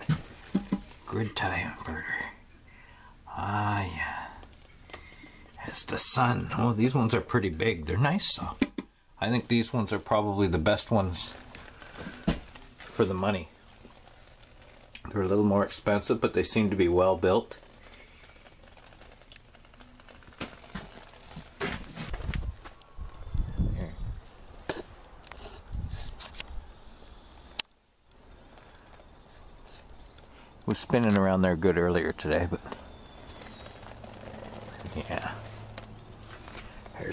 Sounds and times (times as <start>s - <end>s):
Speech: 1.1s - 2.4s, 3.3s - 4.4s, 5.6s - 8.6s, 9.2s - 11.4s, 12.9s - 13.5s, 15.0s - 17.6s, 30.7s - 32.8s, 34.7s - 35.5s.